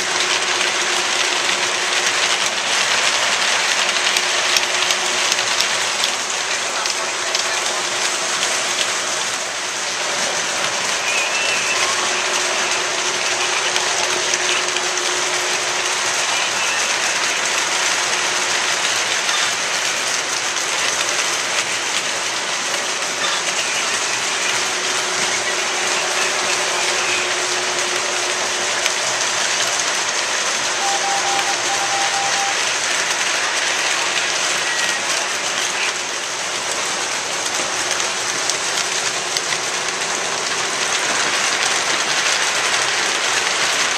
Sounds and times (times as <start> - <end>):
Train: 0.0 - 43.9.